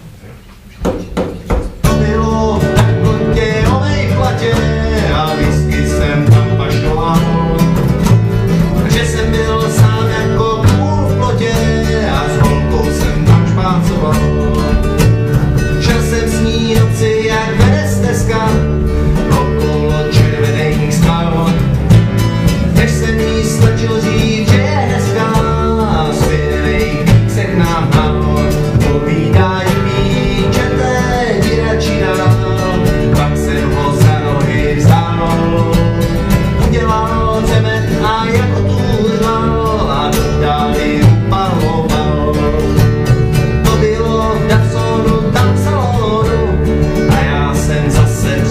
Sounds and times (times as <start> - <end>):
Country: 1.6 - 48.5.